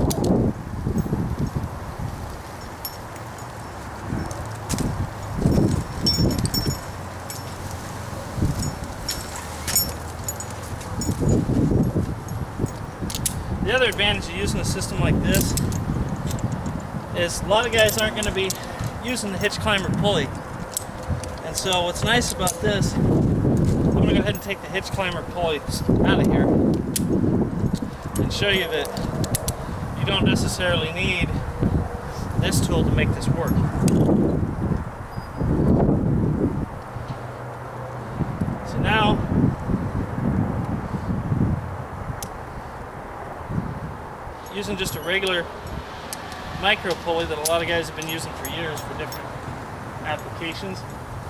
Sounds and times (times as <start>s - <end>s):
Speech: 13.6s - 15.6s, 17.2s - 20.3s, 21.4s - 23.0s, 24.0s - 26.5s, 28.2s - 28.9s, 30.0s - 31.4s, 32.4s - 33.6s, 38.7s - 39.2s, 44.5s - 45.5s, 46.6s - 49.2s, 50.0s - 50.9s.